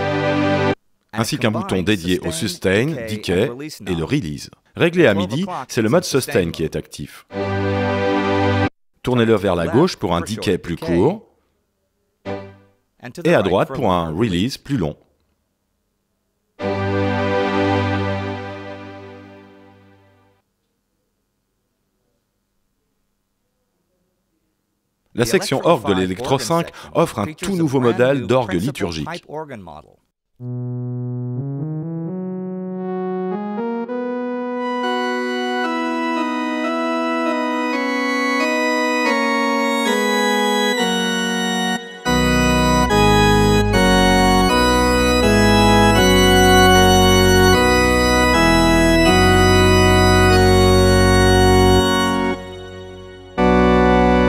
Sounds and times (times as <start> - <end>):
Synthesizer: 0.0 - 0.8, 16.6 - 20.4, 30.4 - 54.2
Speech: 1.1 - 7.3, 9.0 - 11.3, 13.0 - 15.1, 25.2 - 30.0
Electric piano: 31.4 - 54.2.